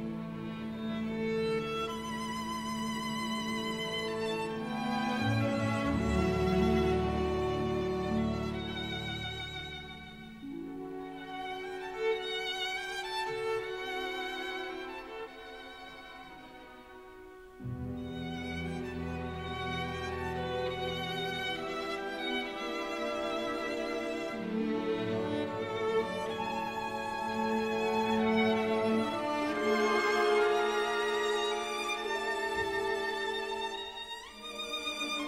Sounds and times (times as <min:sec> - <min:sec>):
Violin, fiddle: 0:00.0 - 0:35.2.